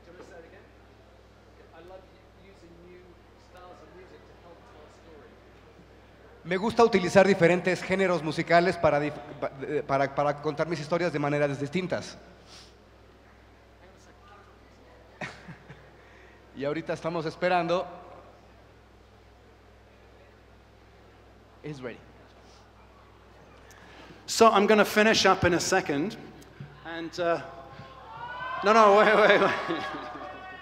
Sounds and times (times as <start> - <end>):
Speech: 0.0 - 0.7, 1.6 - 5.4, 6.4 - 12.2, 24.3 - 26.2.